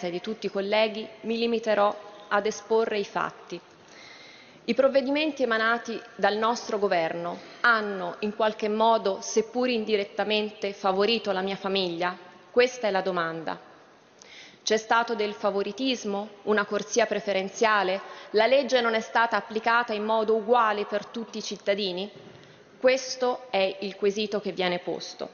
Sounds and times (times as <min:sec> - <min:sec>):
Speech: 0:00.0 - 0:03.6, 0:04.7 - 0:13.6, 0:14.7 - 0:22.1, 0:22.8 - 0:25.3.